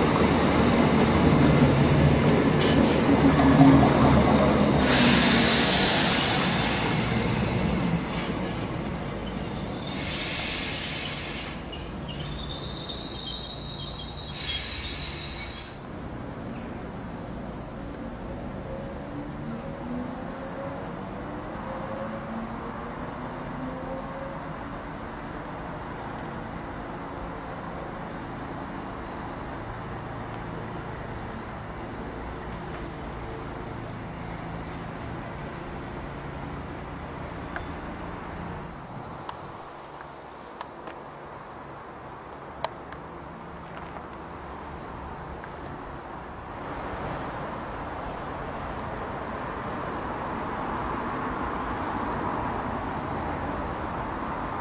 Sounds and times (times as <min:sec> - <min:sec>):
Railroad car, train wagon: 0:00.0 - 0:54.6
Train: 0:00.0 - 0:54.6
Hiss: 0:04.8 - 0:08.9, 0:09.6 - 0:15.9.